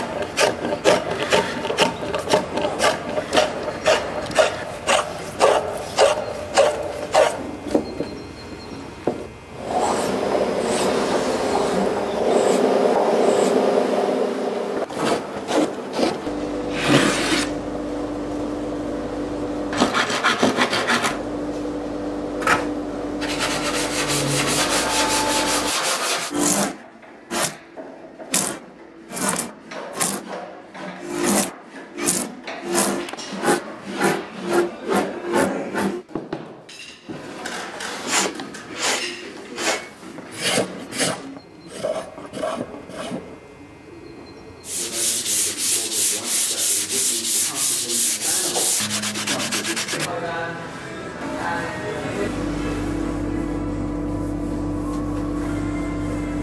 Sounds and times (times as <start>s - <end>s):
Filing (rasp): 0.0s - 7.4s, 19.8s - 21.2s, 23.2s - 27.6s, 28.3s - 30.4s, 31.0s - 36.0s, 37.9s - 43.3s, 44.7s - 50.1s
Rub: 23.2s - 26.6s, 44.7s - 50.1s.